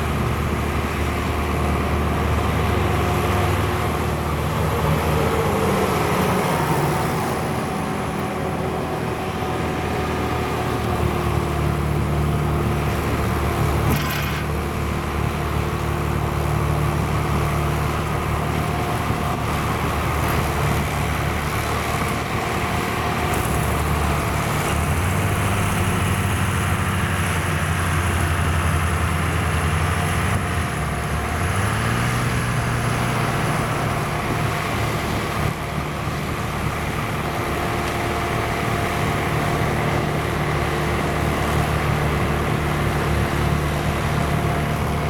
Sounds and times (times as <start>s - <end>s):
Truck: 0.0s - 45.0s.